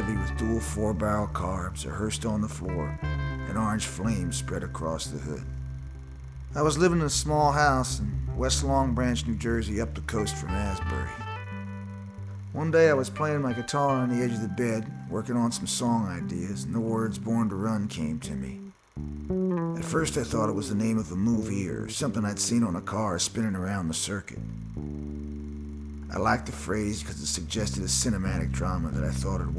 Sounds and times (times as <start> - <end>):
Speech: 0.0 - 5.5, 6.6 - 11.2, 12.5 - 18.6, 19.8 - 24.4, 26.1 - 29.5
Music: 0.0 - 29.5.